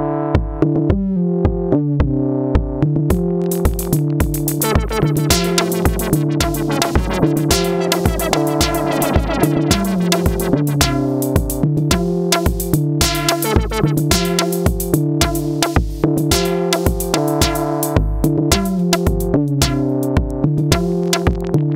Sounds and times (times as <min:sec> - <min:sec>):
Drum machine: 0:00.4 - 0:21.6
Techno: 0:03.2 - 0:19.3
Electronica: 0:03.2 - 0:19.8.